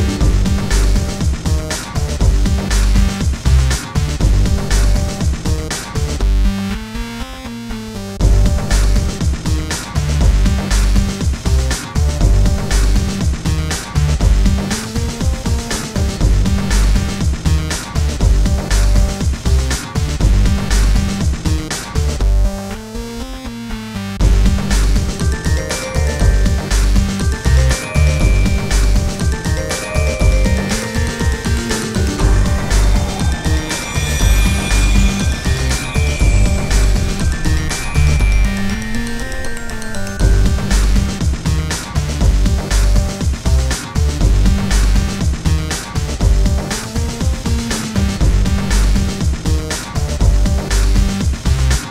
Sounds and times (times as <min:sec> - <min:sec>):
Music: 0:00.0 - 0:51.9.